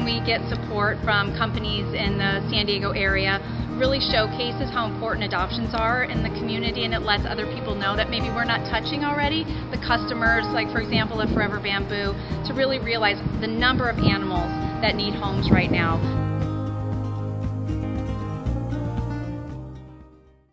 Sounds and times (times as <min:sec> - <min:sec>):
Speech: 0:00.0 - 0:16.1
Music: 0:00.0 - 0:20.5.